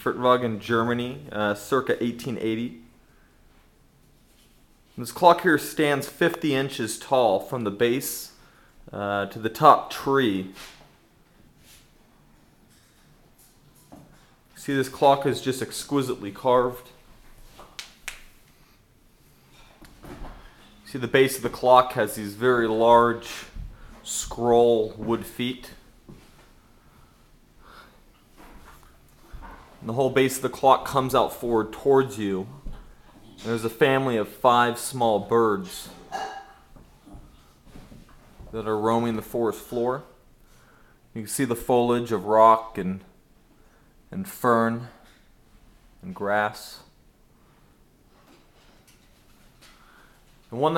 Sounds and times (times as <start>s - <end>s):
Speech: 0.0s - 2.9s, 5.0s - 10.7s, 14.6s - 17.0s, 20.8s - 25.9s, 29.8s - 36.2s, 38.5s - 40.2s, 41.2s - 43.2s, 44.1s - 45.1s, 46.0s - 47.0s, 50.5s - 50.7s.